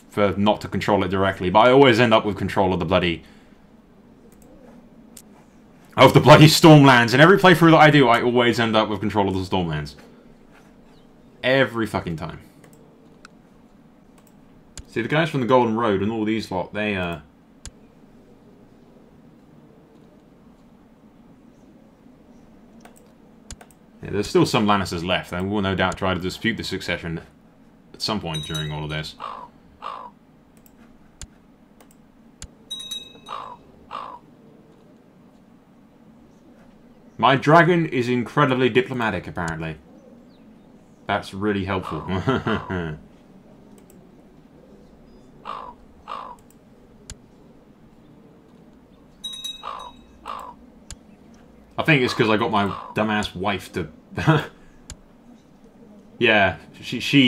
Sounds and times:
Speech: 0.1 - 3.2, 6.0 - 10.1, 11.4 - 12.5, 14.9 - 17.3, 24.0 - 27.3, 27.9 - 29.2, 37.2 - 39.8, 41.1 - 43.0, 51.8 - 54.5, 56.2 - 57.2.

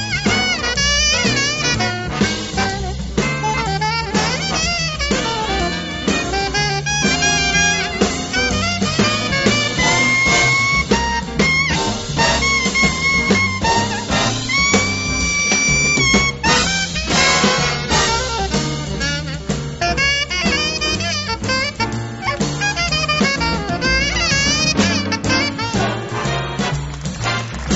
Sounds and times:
Music: 0.0 - 27.7.

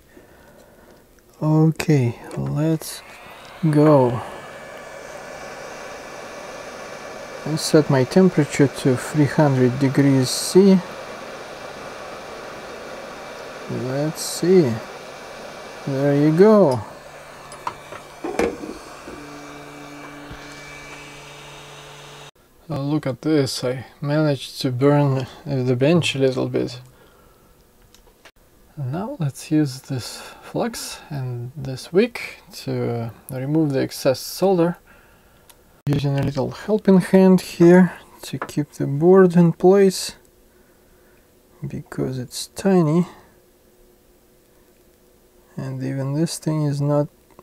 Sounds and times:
Speech: 1.4 - 3.0, 3.6 - 4.2, 7.4 - 10.9, 13.7 - 14.9, 15.9 - 16.9, 22.7 - 26.9, 28.8 - 34.8, 35.9 - 40.2, 41.6 - 43.3, 45.6 - 47.1.

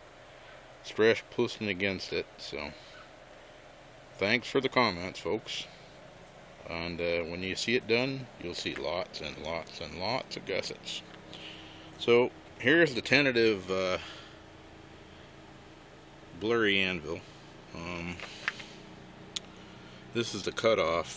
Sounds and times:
Speech: 0.8 - 2.8, 4.2 - 5.8, 6.6 - 11.1, 12.0 - 14.1, 16.3 - 18.2, 20.2 - 21.1.

